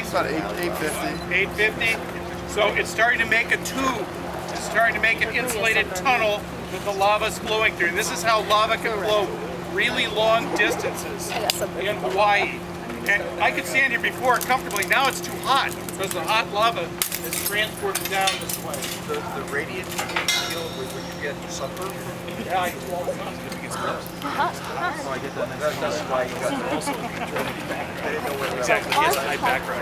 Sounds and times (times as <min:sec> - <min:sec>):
Speech: 0:00.0 - 0:29.8.